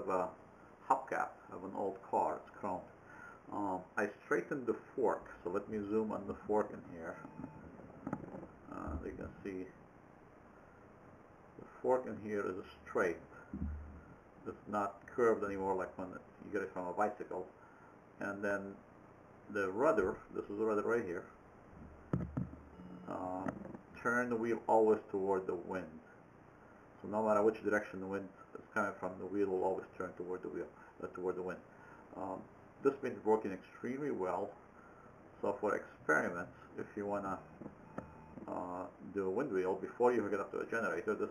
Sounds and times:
Speech: 0.0 - 7.3, 8.7 - 9.8, 11.6 - 13.8, 14.4 - 17.6, 18.2 - 18.8, 19.5 - 21.4, 23.1 - 26.1, 27.0 - 34.6, 35.4 - 37.5, 38.4 - 41.3.

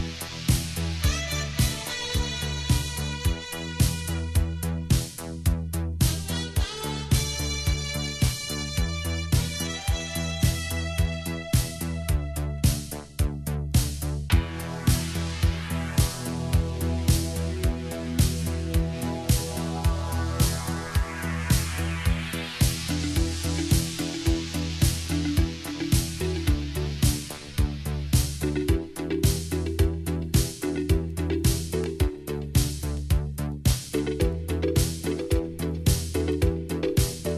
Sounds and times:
Dance music: 0.0 - 37.3
Disco: 0.0 - 37.3
Jazz: 0.0 - 37.3.

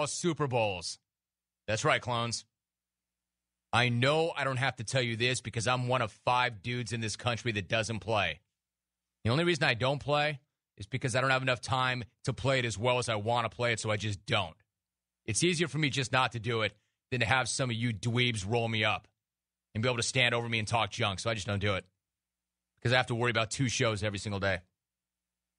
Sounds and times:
Speech: 0.0 - 1.1, 1.7 - 2.6, 3.7 - 8.5, 9.2 - 14.6, 15.3 - 19.1, 19.7 - 22.0, 22.8 - 24.8.

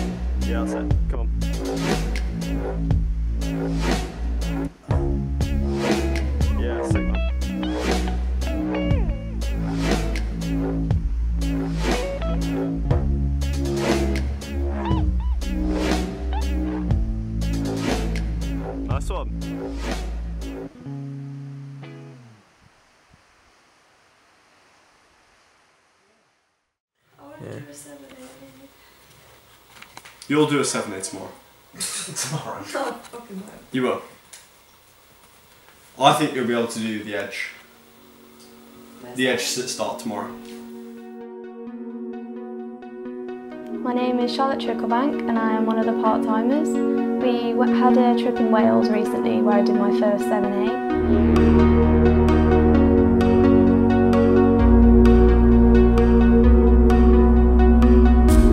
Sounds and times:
Music: 0.0 - 22.4, 36.8 - 58.5.

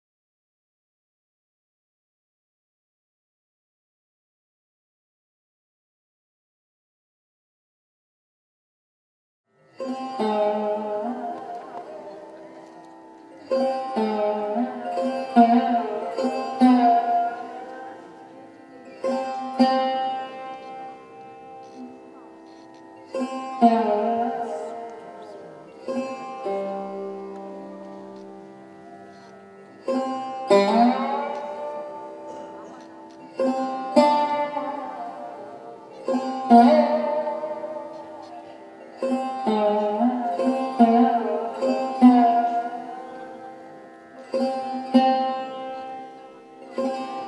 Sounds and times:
Bowed string instrument: 9.5 - 47.2
Classical music: 10.1 - 47.2
Speech: 10.2 - 26.0, 30.6 - 43.4.

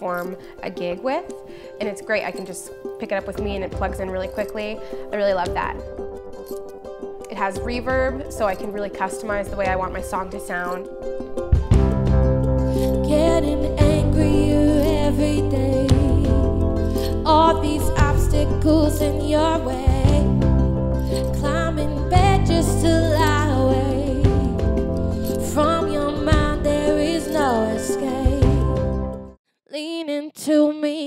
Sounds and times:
Speech: 0.0 - 5.8, 7.3 - 10.8
Music: 0.0 - 31.0.

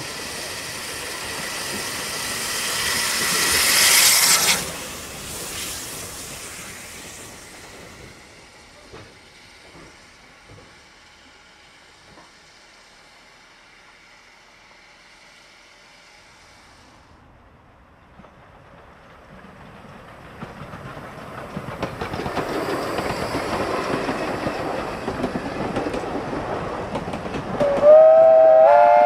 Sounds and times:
Outside, rural or natural: 0.0 - 29.0
Train whistle: 27.6 - 29.0.

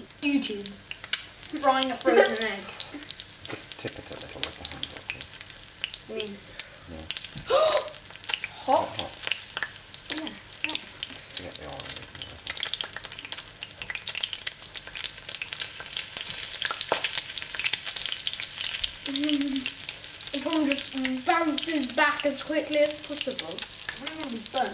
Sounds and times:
Frying (food): 0.0 - 24.7
Speech: 0.2 - 0.8, 1.6 - 2.7, 3.5 - 5.2, 6.1 - 7.1, 8.7 - 9.2, 10.1 - 12.4, 19.1 - 19.6, 20.4 - 24.7.

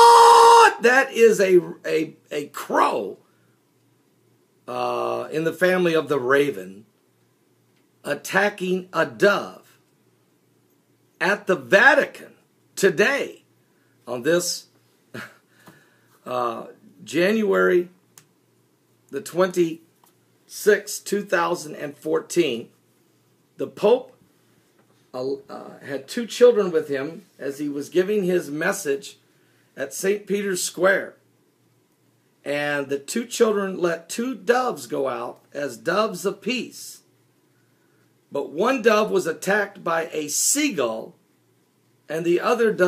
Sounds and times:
Speech: 0.5 - 3.2, 4.7 - 6.9, 8.0 - 9.8, 11.2 - 13.5, 14.1 - 14.7, 16.2 - 18.0, 19.1 - 19.9, 20.5 - 22.8, 23.6 - 24.2, 25.2 - 29.2, 29.8 - 31.2, 32.5 - 37.1, 38.3 - 41.2, 42.1 - 42.8.

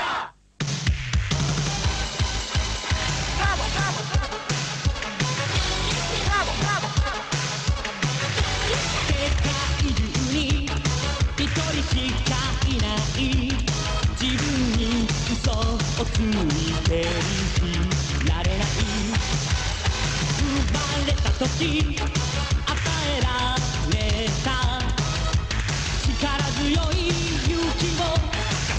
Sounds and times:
Music: 0.1 - 28.7.

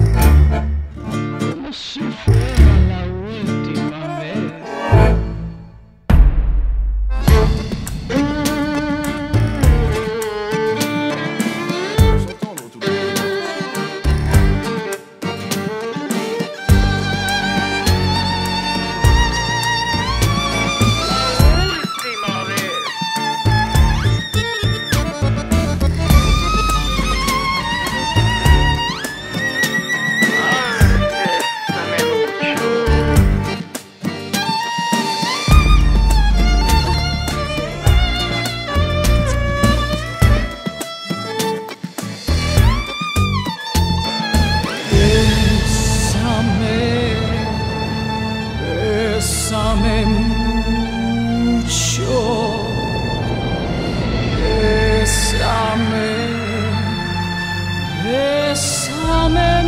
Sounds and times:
Music: 0.0 - 59.6.

